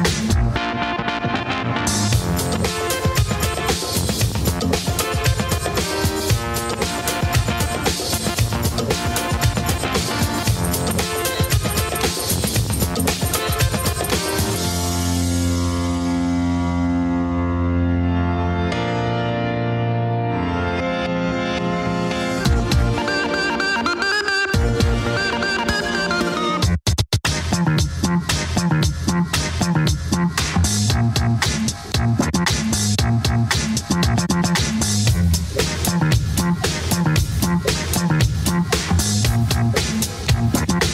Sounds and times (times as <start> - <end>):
Music: 0.0 - 40.9.